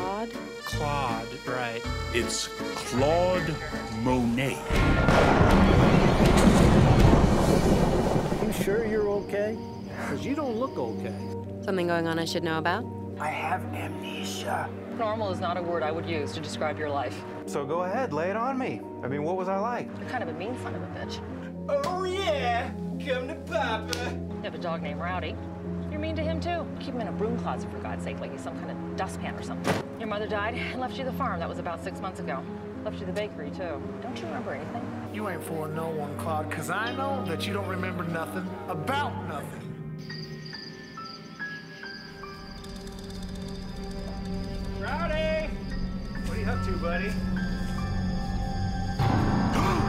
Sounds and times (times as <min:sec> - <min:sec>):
Music: 0:00.0 - 0:49.8.